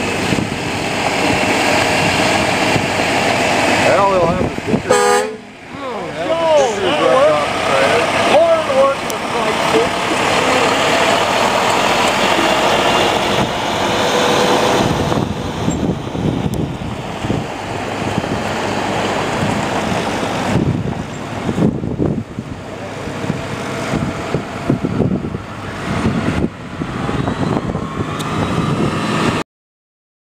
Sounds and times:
Truck: 0:00.0 - 0:29.4.

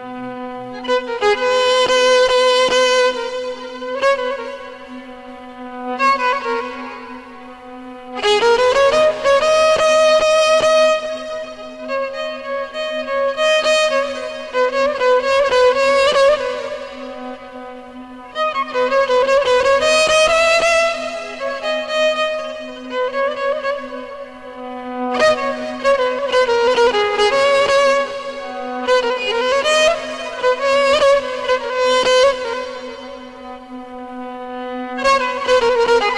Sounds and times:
Violin, fiddle: 0:00.0 - 0:36.1.

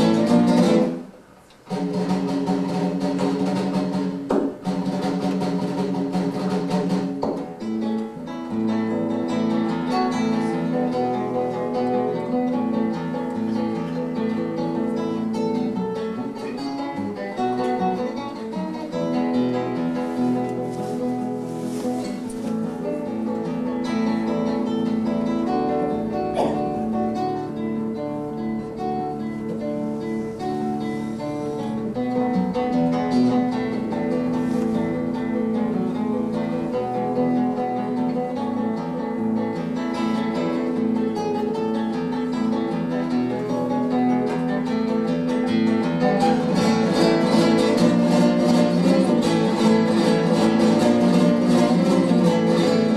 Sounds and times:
Acoustic guitar: 0:00.0 - 0:52.9
Strum: 0:00.0 - 0:52.9.

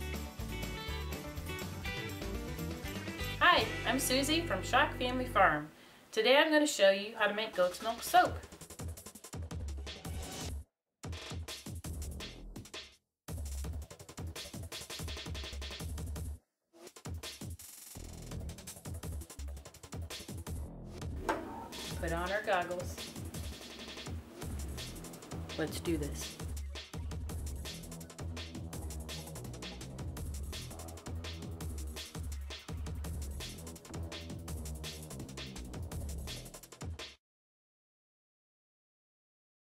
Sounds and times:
Music: 0:00.0 - 0:05.7, 0:07.3 - 0:37.2
Speech: 0:03.4 - 0:08.5, 0:22.0 - 0:23.0, 0:25.6 - 0:26.4.

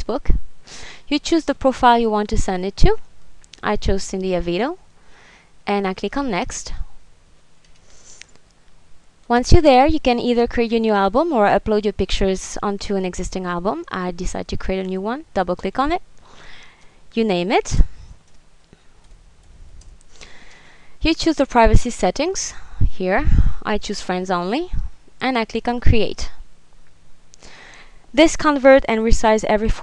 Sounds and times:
Speech: 0:00.0 - 0:00.4, 0:01.1 - 0:04.8, 0:05.7 - 0:06.9, 0:09.3 - 0:16.0, 0:17.2 - 0:17.9, 0:21.0 - 0:26.4, 0:28.2 - 0:29.8.

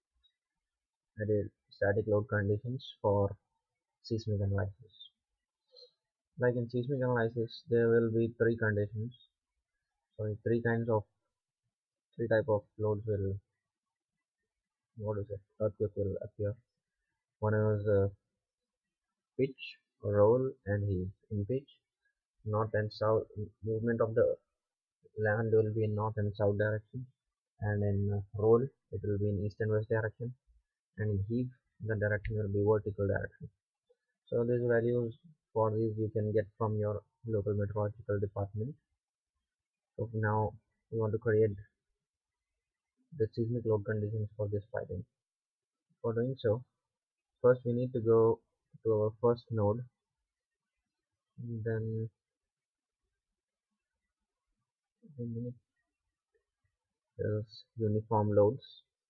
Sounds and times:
Speech: 0:01.2 - 0:03.4, 0:04.0 - 0:05.2, 0:06.4 - 0:09.3, 0:10.2 - 0:11.1, 0:12.2 - 0:13.4, 0:15.0 - 0:16.6, 0:17.4 - 0:18.2, 0:19.4 - 0:21.8, 0:22.5 - 0:24.4, 0:25.2 - 0:30.4, 0:31.0 - 0:33.6, 0:34.3 - 0:38.8, 0:40.0 - 0:41.7, 0:43.2 - 0:45.1, 0:46.0 - 0:46.7, 0:47.4 - 0:49.9, 0:51.4 - 0:52.2, 0:55.1 - 0:55.6, 0:57.2 - 0:58.9.

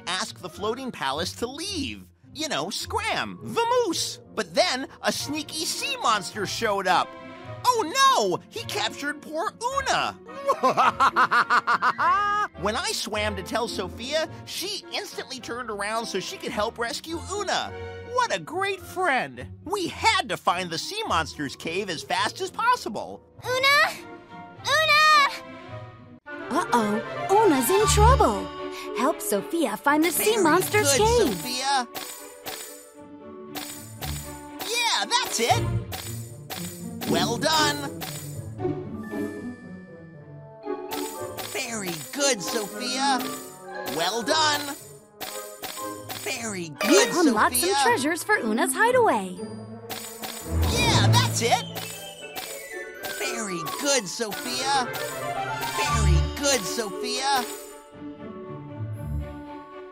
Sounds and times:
Speech: 0:00.0 - 0:07.0, 0:07.6 - 0:10.2, 0:12.6 - 0:24.0, 0:26.5 - 0:28.4, 0:29.0 - 0:31.9, 0:34.6 - 0:35.6, 0:37.1 - 0:37.9, 0:41.6 - 0:43.3, 0:43.9 - 0:44.8, 0:46.2 - 0:49.4, 0:50.7 - 0:51.7, 0:53.2 - 0:54.9, 0:55.7 - 0:57.5
Music: 0:00.0 - 0:59.9.

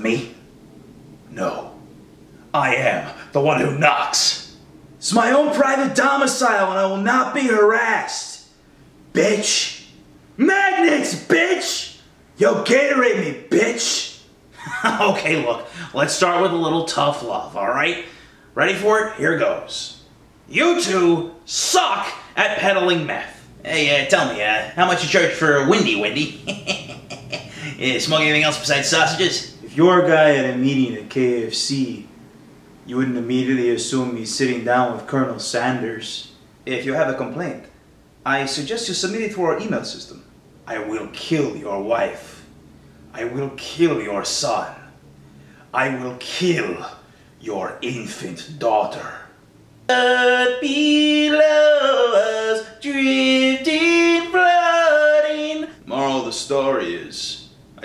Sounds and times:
Speech: 0:00.0 - 0:00.4, 0:01.3 - 0:01.8, 0:02.5 - 0:08.5, 0:09.1 - 0:32.1, 0:32.9 - 0:42.5, 0:43.1 - 0:45.0, 0:45.7 - 0:57.8.

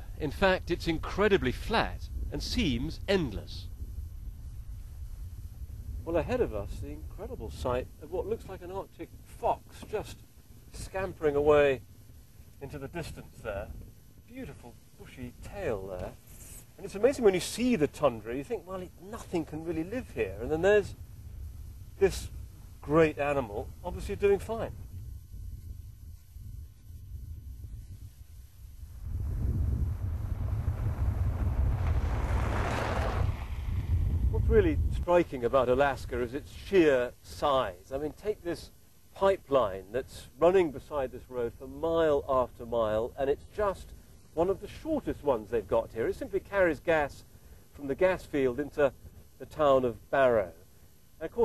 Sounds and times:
Speech: 0:00.0 - 0:03.7, 0:06.0 - 0:11.8, 0:12.6 - 0:16.2, 0:16.8 - 0:21.0, 0:22.0 - 0:24.8, 0:34.4 - 0:50.6, 0:51.2 - 0:51.4
Outside, rural or natural: 0:00.0 - 0:51.4.

